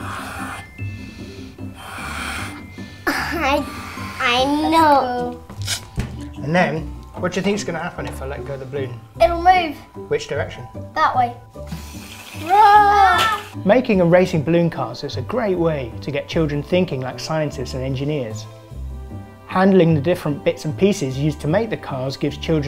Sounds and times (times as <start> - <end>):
Child speech, kid speaking: 3.2 - 5.4, 9.2 - 9.9, 10.9 - 11.4, 12.4 - 13.5.